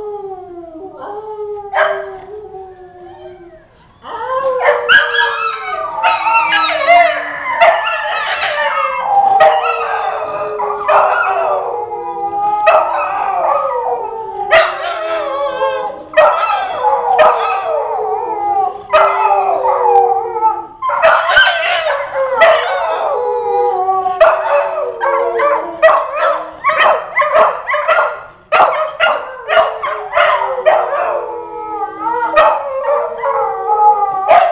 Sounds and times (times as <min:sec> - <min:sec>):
Bark: 0:01.8 - 0:02.0, 0:20.9 - 0:22.6, 0:25.8 - 0:31.0.